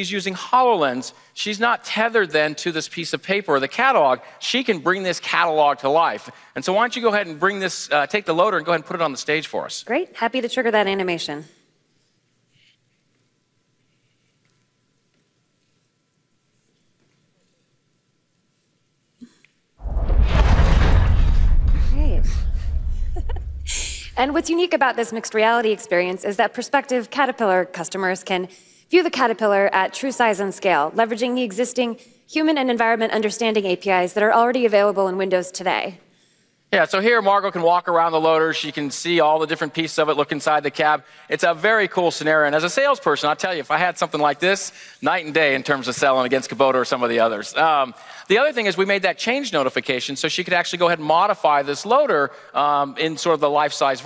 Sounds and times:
Speech: 0.0 - 11.5, 36.7 - 54.0.

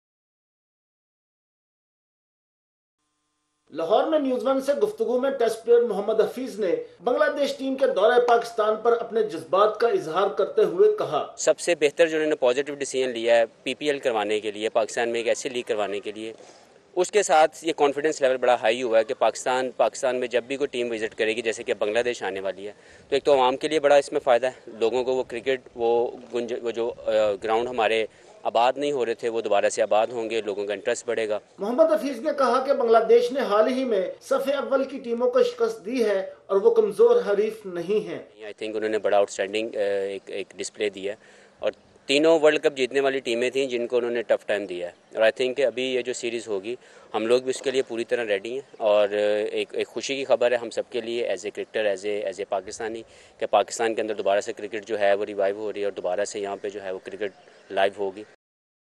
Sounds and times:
Speech: 3.8 - 16.4, 17.0 - 58.4.

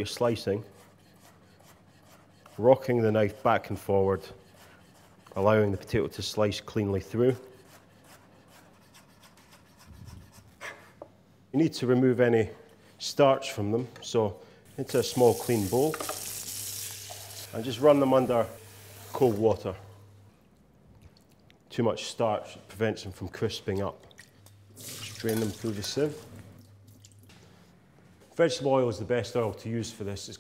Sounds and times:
Speech: 0.0 - 0.7, 2.6 - 4.4, 5.4 - 7.5, 11.5 - 16.0, 17.5 - 19.9, 21.7 - 24.0, 25.1 - 26.3, 28.3 - 30.4.

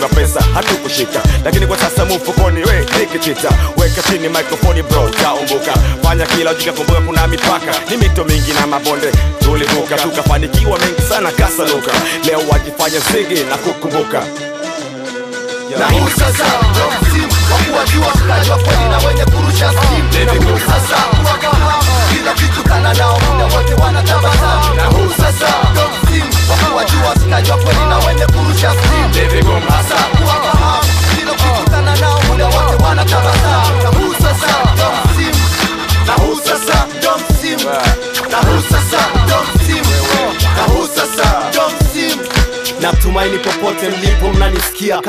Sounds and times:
Rapping: 0.0 - 14.4, 15.7 - 45.0
Hip hop music: 0.0 - 45.0
Music of Africa: 0.0 - 45.0
Folk music: 0.2 - 45.0
Song: 0.3 - 45.0.

